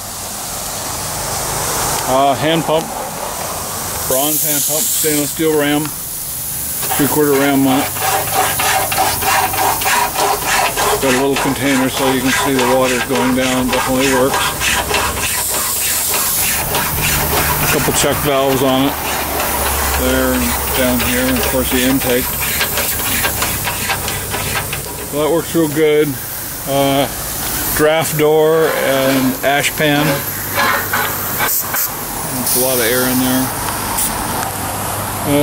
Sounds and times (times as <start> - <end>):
Steam: 0.0 - 35.4
Speech: 2.1 - 2.9, 4.1 - 6.0, 6.9 - 7.9, 11.0 - 14.4, 17.7 - 19.0, 20.0 - 22.3, 25.1 - 27.2, 27.8 - 30.3, 32.3 - 33.6.